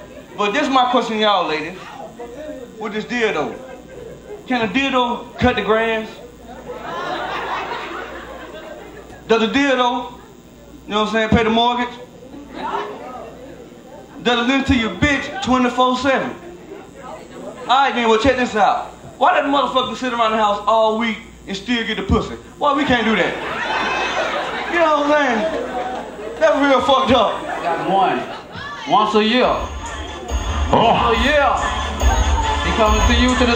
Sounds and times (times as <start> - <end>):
Speech: 10.9 - 23.4.